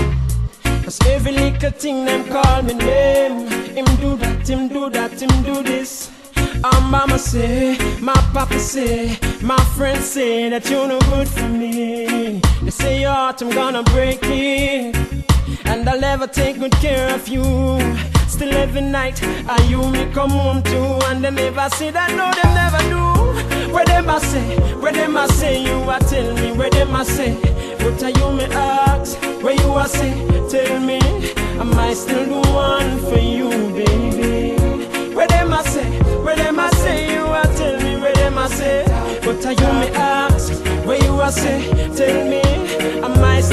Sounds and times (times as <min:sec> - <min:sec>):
Afrobeat: 0:00.0 - 0:43.5.